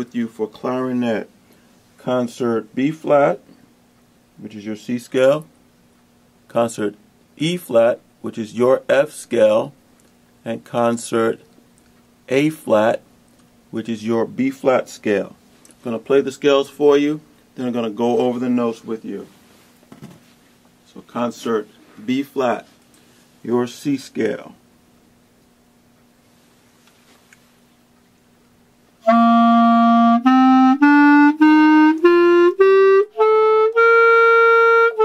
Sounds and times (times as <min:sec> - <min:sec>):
Speech: 0:00.0 - 0:01.3, 0:02.0 - 0:03.6, 0:04.4 - 0:05.5, 0:06.5 - 0:09.8, 0:10.4 - 0:11.5, 0:12.3 - 0:13.1, 0:13.7 - 0:19.4, 0:20.9 - 0:22.8, 0:23.4 - 0:24.6
Wind instrument, woodwind instrument: 0:29.0 - 0:35.0.